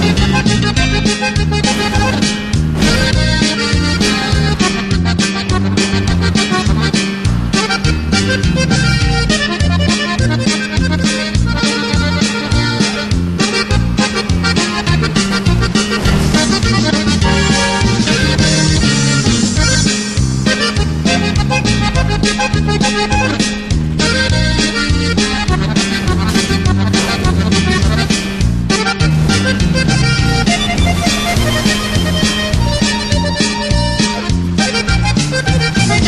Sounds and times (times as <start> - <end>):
Music: 0.0 - 36.0.